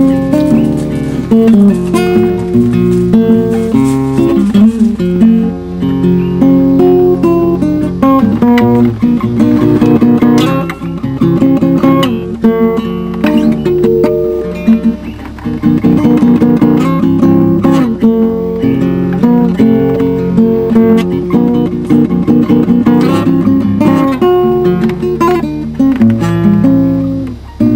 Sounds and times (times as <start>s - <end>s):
Strum: 0.0s - 27.7s.